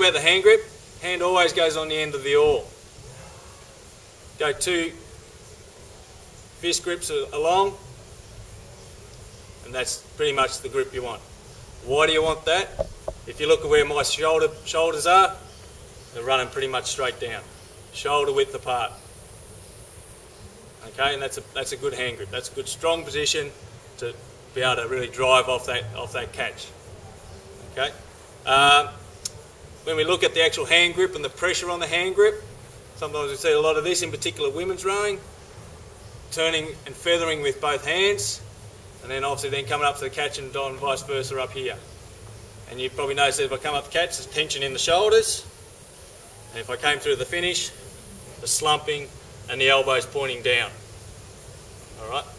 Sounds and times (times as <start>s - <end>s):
Male speech, man speaking: 0.0s - 2.7s, 4.4s - 5.0s, 6.6s - 7.8s, 9.6s - 11.2s, 11.8s - 15.4s, 16.2s - 19.0s, 20.8s - 26.7s, 27.8s - 29.0s, 29.8s - 32.4s, 33.0s - 35.2s, 36.3s - 38.4s, 39.0s - 41.8s, 42.7s - 45.5s, 46.5s - 47.8s, 48.4s - 50.8s, 52.0s - 52.3s.